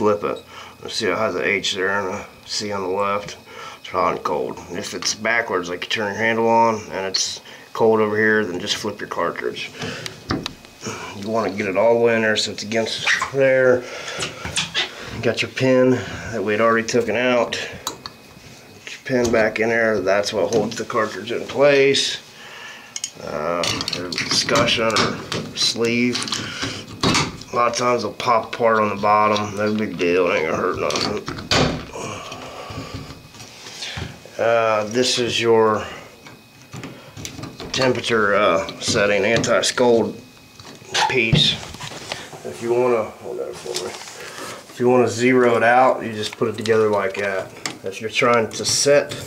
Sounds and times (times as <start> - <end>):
Speech: 0.0 - 9.8, 11.2 - 13.8, 15.2 - 17.8, 18.9 - 22.2, 23.2 - 26.3, 27.5 - 31.3, 34.4 - 36.0, 37.7 - 40.2, 40.9 - 41.7, 42.4 - 44.0, 44.8 - 49.2.